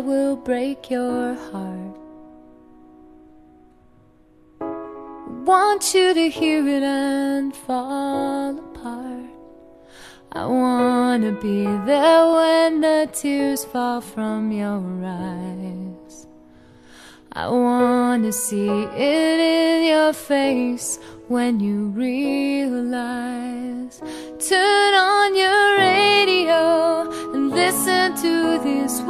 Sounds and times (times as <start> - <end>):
Music: 0.0 - 29.1.